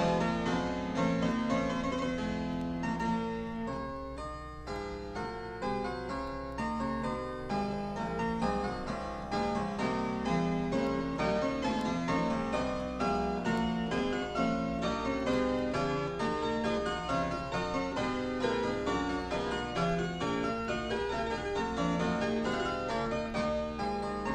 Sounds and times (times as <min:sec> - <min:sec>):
Piano: 0:00.0 - 0:24.3.